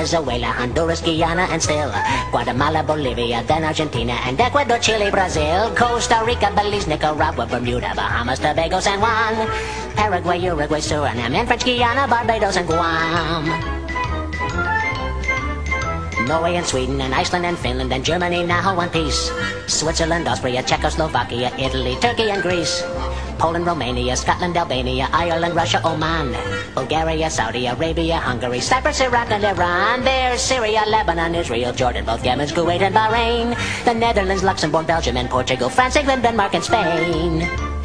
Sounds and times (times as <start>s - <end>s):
Male singing: 0.0s - 13.6s, 16.2s - 22.8s, 23.4s - 37.5s
Music: 0.0s - 37.8s.